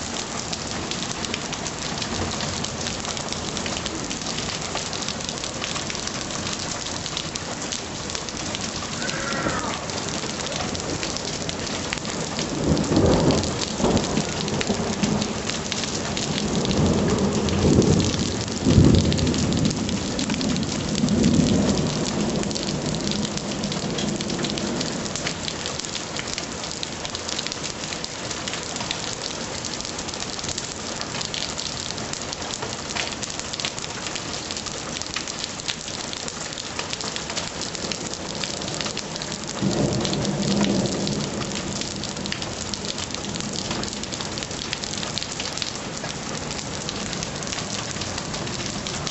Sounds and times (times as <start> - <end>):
Rain on surface: 0.0 - 49.1
Raindrop: 0.0 - 49.1.